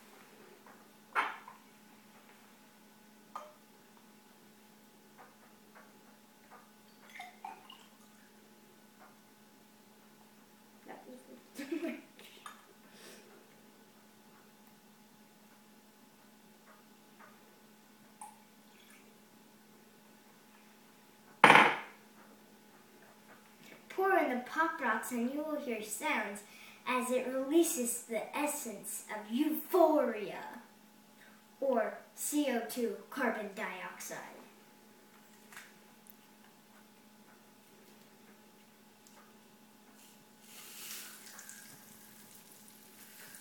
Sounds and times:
Speech: 0:10.8 - 0:11.4, 0:23.9 - 0:30.7, 0:31.6 - 0:34.5.

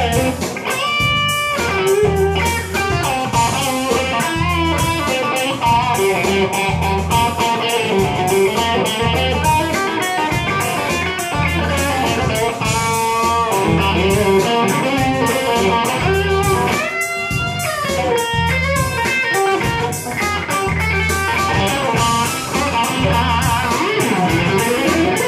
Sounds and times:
Electric guitar: 0:00.0 - 0:25.2.

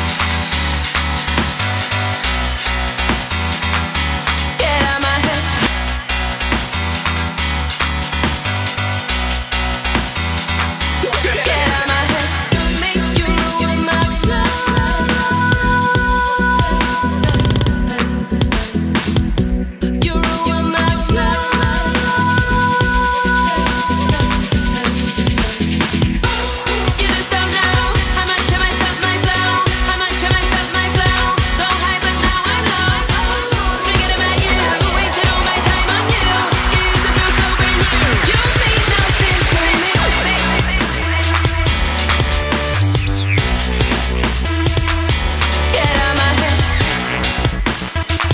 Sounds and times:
Dubstep: 0:00.0 - 0:15.4, 0:23.5 - 0:48.3.

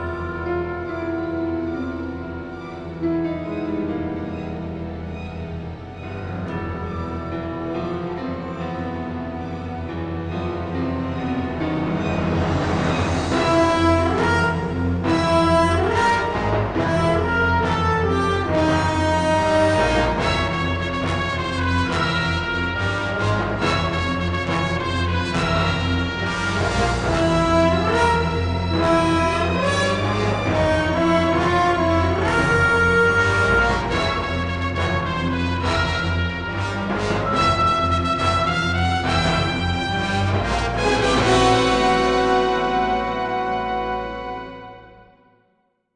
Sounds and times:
Music: 0:00.0 - 0:45.9.

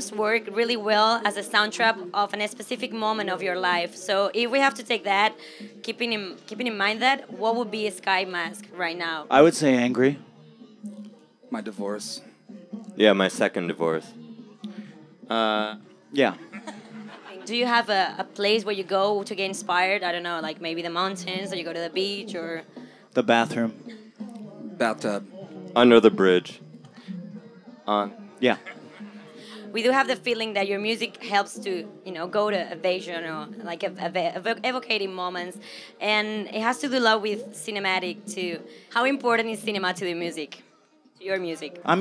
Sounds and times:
Music: 0:00.0 - 0:42.0.

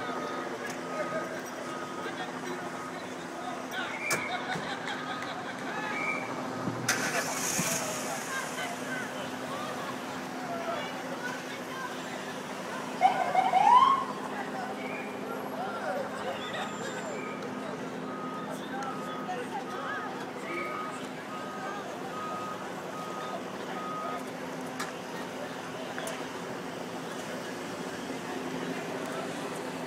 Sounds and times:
Speech: 0:00.0 - 0:04.6, 0:07.1 - 0:29.8
Car: 0:00.0 - 0:29.8
Hubbub, speech noise, speech babble: 0:00.0 - 0:29.8
Traffic noise, roadway noise: 0:00.0 - 0:29.8.

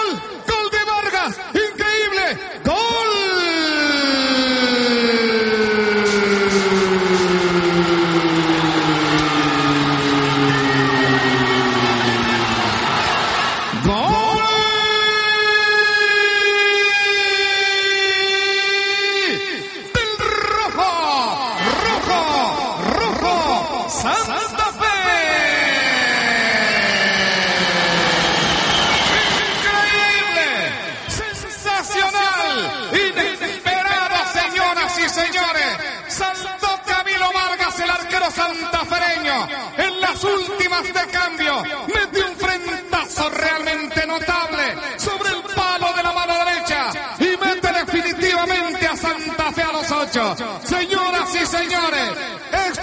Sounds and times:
Speech: 0:00.0 - 0:05.3, 0:13.8 - 0:27.0, 0:29.1 - 0:52.8.

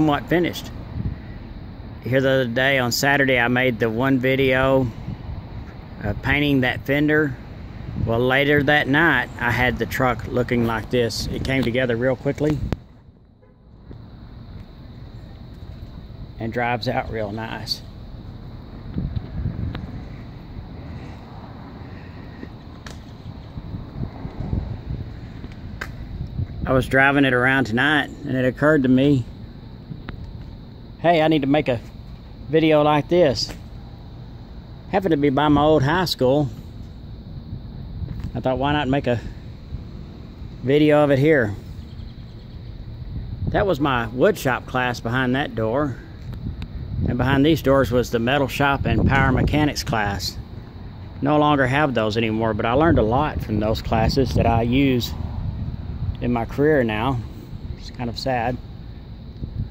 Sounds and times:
Speech: 0:00.0 - 0:00.8, 0:02.0 - 0:05.0, 0:06.0 - 0:07.4, 0:08.0 - 0:12.7, 0:16.4 - 0:17.9, 0:26.6 - 0:29.3, 0:31.0 - 0:31.9, 0:32.5 - 0:33.6, 0:34.9 - 0:36.6, 0:38.3 - 0:39.4, 0:40.6 - 0:41.6, 0:43.5 - 0:46.0, 0:47.1 - 0:50.4, 0:51.2 - 0:55.2, 0:56.2 - 0:58.6.

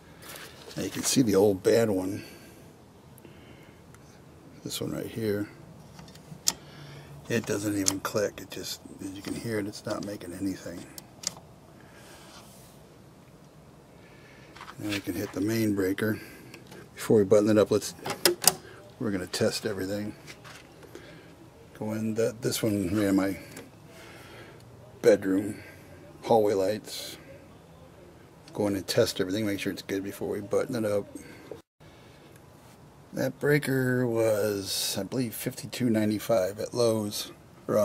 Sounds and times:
Speech: 0:00.7 - 0:02.4, 0:04.6 - 0:05.6, 0:07.3 - 0:11.0, 0:14.8 - 0:16.4, 0:17.0 - 0:23.6, 0:24.8 - 0:31.6, 0:33.1 - 0:37.8.

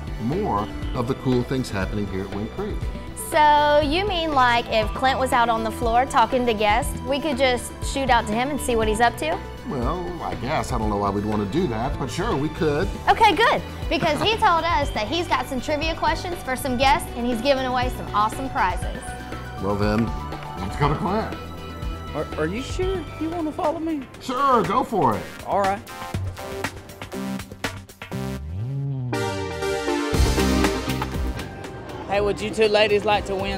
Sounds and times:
Music: 0:00.0 - 0:33.5.

